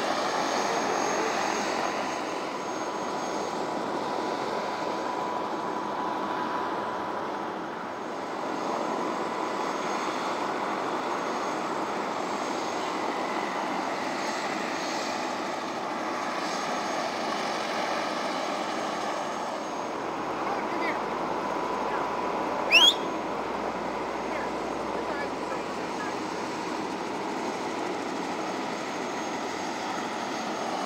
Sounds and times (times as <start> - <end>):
Helicopter: 0.0 - 30.8
Motor vehicle (road): 0.0 - 30.8
Speech: 0.6 - 1.6, 20.4 - 21.0, 24.3 - 26.2.